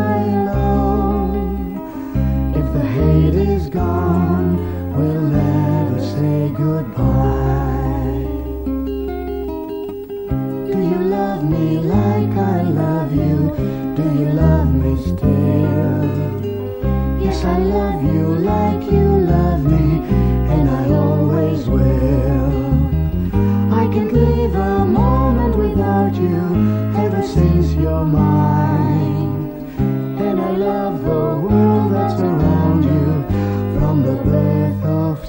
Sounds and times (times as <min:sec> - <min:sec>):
Music: 0:00.0 - 0:35.2.